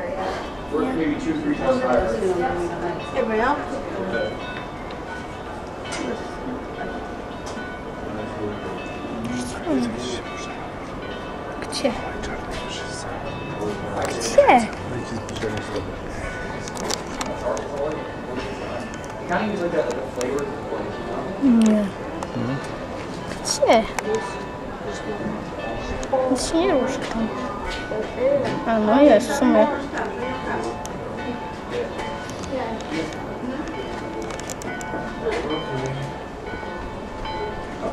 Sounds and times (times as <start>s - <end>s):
Bell: 0.0s - 37.9s.